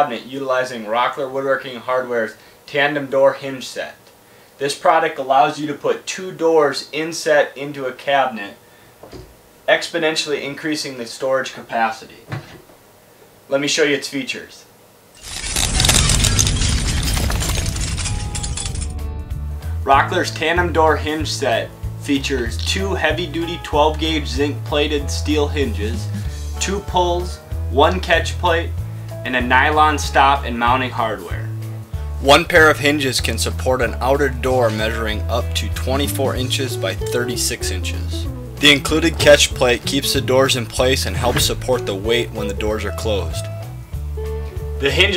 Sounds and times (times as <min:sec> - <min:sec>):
Speech: 0:00.0 - 0:08.6, 0:09.7 - 0:12.3, 0:13.5 - 0:14.7, 0:19.8 - 0:31.5, 0:32.2 - 0:43.5, 0:44.8 - 0:45.1
Music: 0:17.8 - 0:45.1.